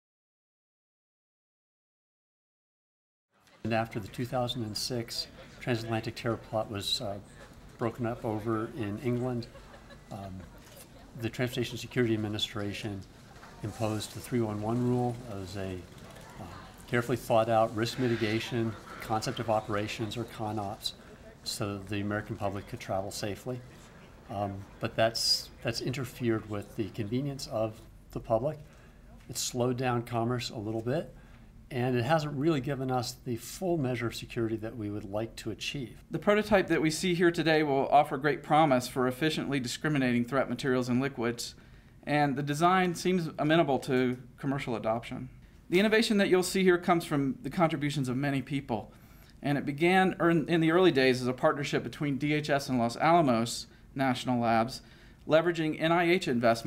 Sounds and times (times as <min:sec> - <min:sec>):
Speech: 0:03.5 - 0:56.6.